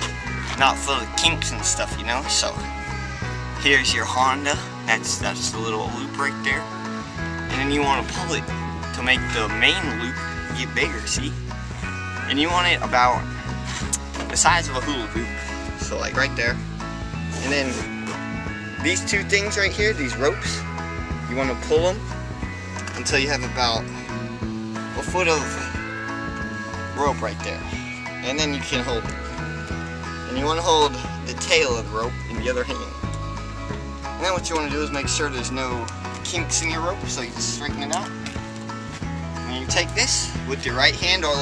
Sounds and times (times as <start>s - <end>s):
Music: 0.0s - 41.4s
Speech: 0.6s - 2.6s, 3.6s - 6.7s, 7.5s - 11.3s, 12.3s - 13.2s, 14.3s - 16.6s, 17.4s - 17.9s, 18.8s - 20.6s, 21.3s - 22.0s, 23.0s - 23.8s, 25.0s - 25.8s, 27.0s - 29.1s, 30.3s - 33.0s, 34.2s - 38.2s, 39.5s - 41.4s.